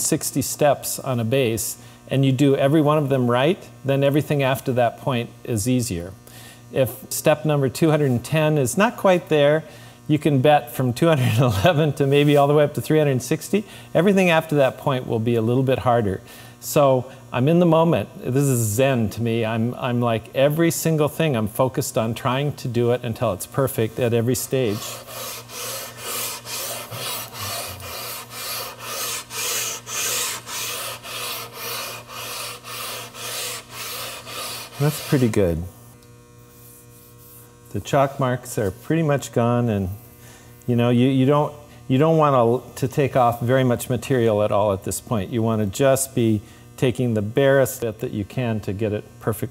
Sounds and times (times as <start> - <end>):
Filing (rasp): 24.0 - 35.6
Rub: 24.4 - 35.5, 36.5 - 37.6.